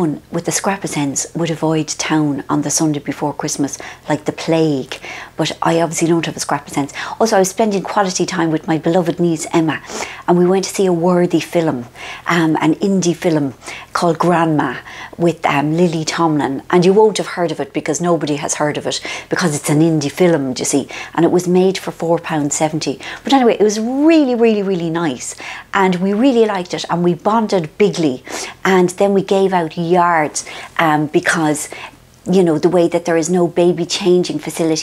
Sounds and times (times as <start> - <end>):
Speech: 0.0 - 34.8.